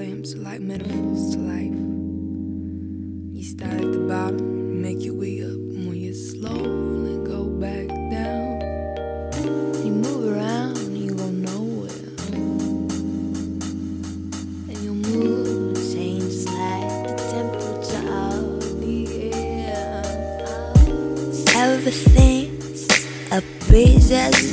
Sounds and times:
Vibraphone: 0:14.4 - 0:22.9.

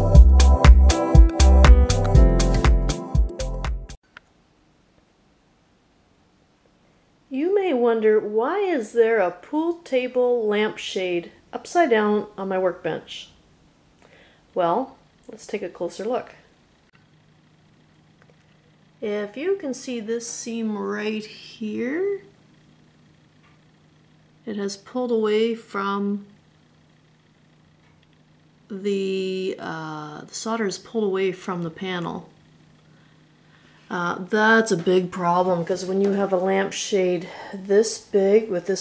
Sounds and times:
Speech: 0:07.3 - 0:13.4, 0:14.6 - 0:16.5, 0:19.0 - 0:22.3, 0:24.4 - 0:26.4, 0:28.7 - 0:32.4, 0:33.9 - 0:38.8.

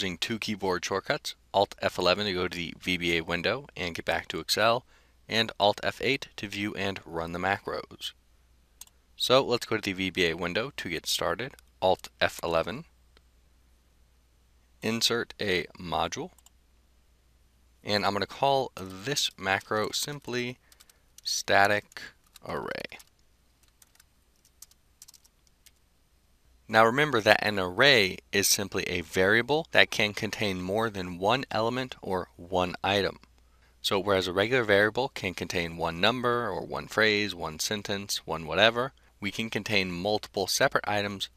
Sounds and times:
Speech: 0:00.0 - 0:08.2, 0:09.2 - 0:12.9, 0:14.8 - 0:16.4, 0:17.8 - 0:20.6, 0:21.2 - 0:23.1, 0:26.7 - 0:33.2, 0:33.8 - 0:41.3.

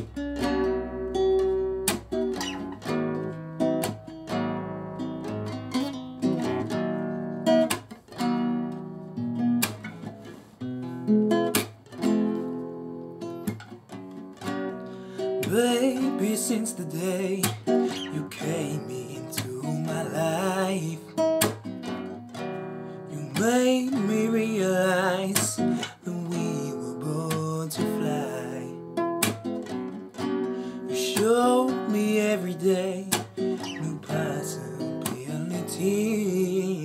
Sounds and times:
Music: 0:00.0 - 0:36.8
Male singing: 0:15.4 - 0:21.2, 0:23.1 - 0:28.8, 0:31.0 - 0:36.8.

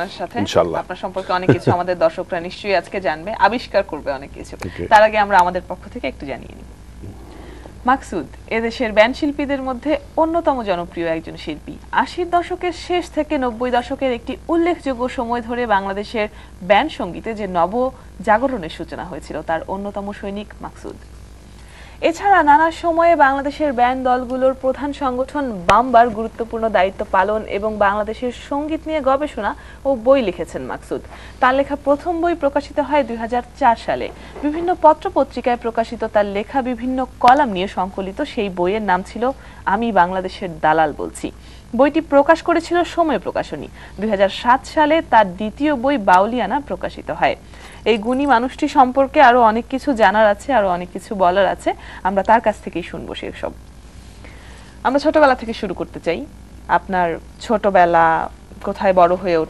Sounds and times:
Speech: 0:00.0 - 0:07.2, 0:22.0 - 0:53.6, 0:54.9 - 0:59.4.

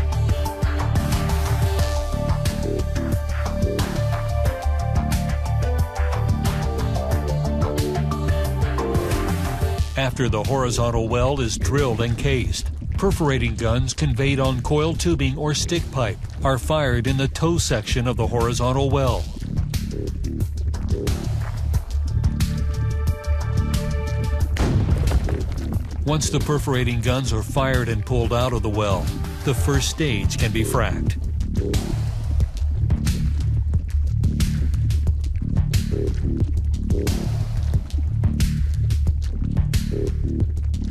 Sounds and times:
Music: 0:00.0 - 0:40.9
Speech: 0:10.0 - 0:19.4, 0:26.0 - 0:31.2.

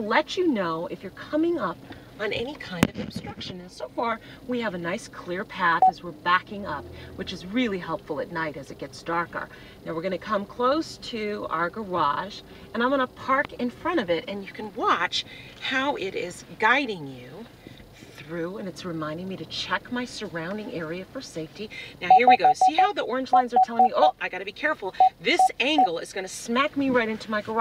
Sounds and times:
Speech: 0:00.0 - 0:17.5, 0:18.2 - 0:27.6.

